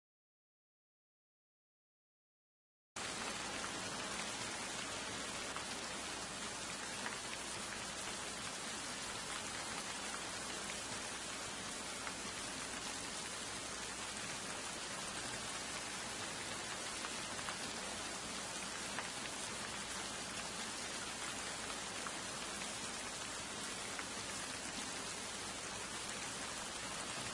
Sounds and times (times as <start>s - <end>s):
Rain on surface: 3.0s - 27.3s
Raindrop: 3.0s - 27.3s.